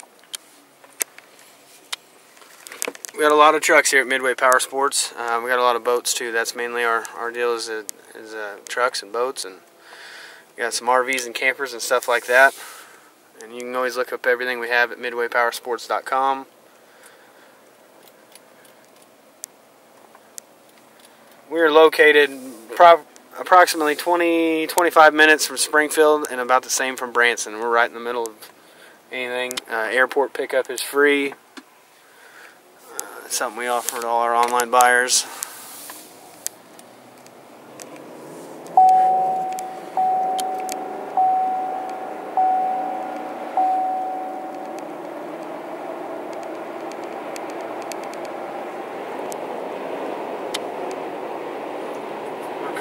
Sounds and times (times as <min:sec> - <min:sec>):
Car: 0:00.0 - 0:52.8
Speech: 0:03.2 - 0:09.6, 0:10.6 - 0:12.6, 0:13.4 - 0:16.5, 0:21.5 - 0:28.5, 0:29.1 - 0:31.4, 0:32.9 - 0:35.3.